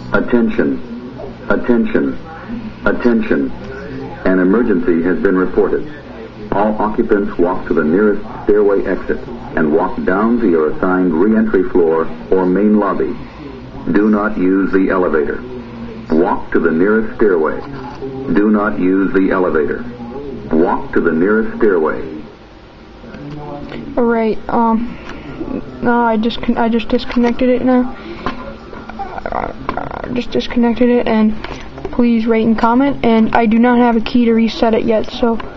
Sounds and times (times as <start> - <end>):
Speech: 0.0 - 22.3, 23.1 - 35.5.